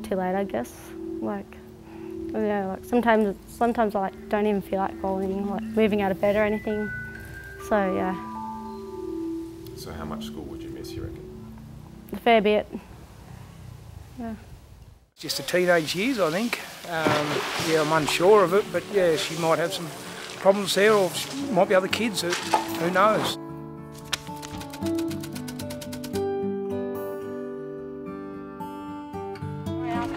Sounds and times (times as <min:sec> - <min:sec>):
Marimba, xylophone: 0:04.8 - 0:11.3
Glockenspiel: 0:04.9 - 0:11.2
Chime: 0:05.2 - 0:09.2.